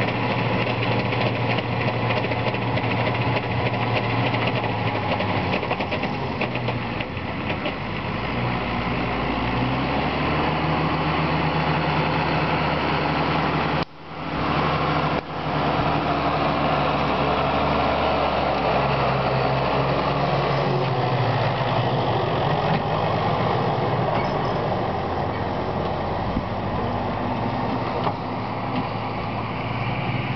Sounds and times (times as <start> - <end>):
Outside, rural or natural: 0.0 - 30.3
Vehicle: 0.0 - 30.3.